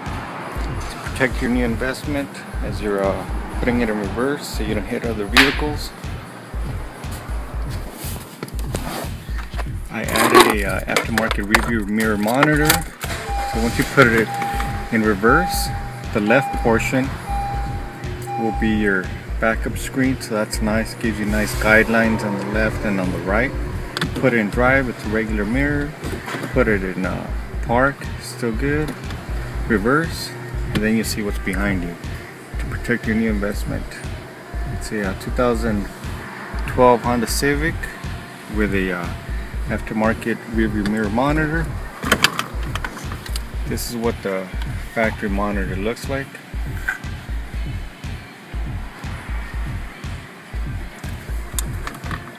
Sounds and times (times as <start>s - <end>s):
Speech: 1.1s - 6.0s, 9.9s - 12.9s, 13.6s - 17.2s, 18.4s - 23.6s, 24.2s - 25.9s, 26.5s - 29.0s, 29.6s - 34.1s, 34.7s - 35.9s, 36.6s - 41.8s, 43.6s - 46.4s.